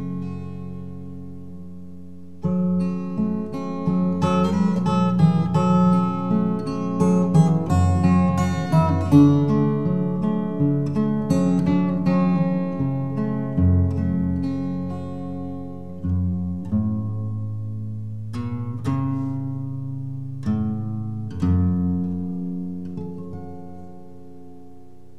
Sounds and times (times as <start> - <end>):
Guitar: 0.0 - 25.1.